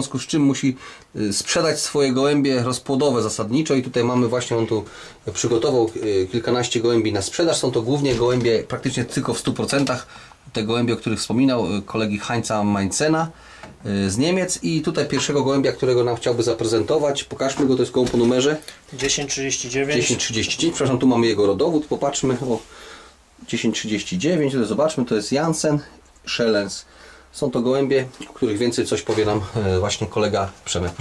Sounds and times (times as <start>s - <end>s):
Speech: 0.0s - 22.7s, 23.4s - 31.0s
Inside, small room: 0.0s - 31.0s.